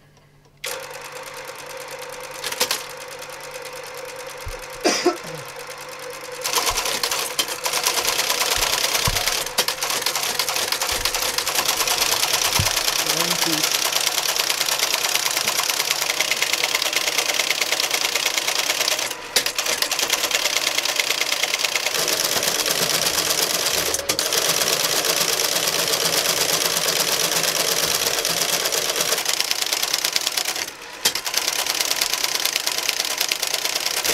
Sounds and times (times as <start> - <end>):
Typewriter: 0.6 - 4.8, 6.2 - 34.1.